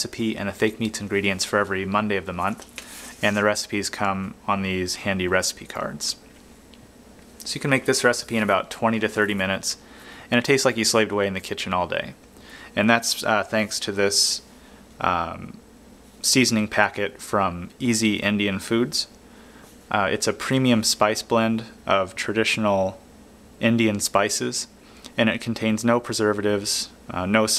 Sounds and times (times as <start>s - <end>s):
Speech: 0.0s - 2.6s, 3.2s - 6.2s, 7.4s - 15.6s, 16.2s - 19.2s, 19.9s - 23.0s, 23.6s - 27.5s.